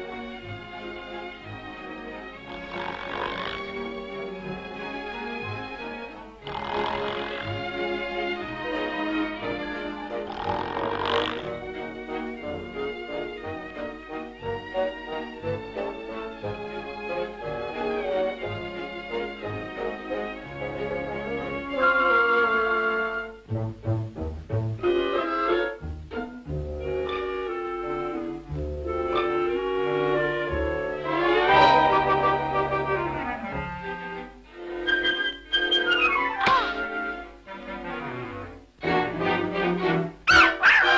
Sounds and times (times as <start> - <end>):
Music: 0.0 - 40.9.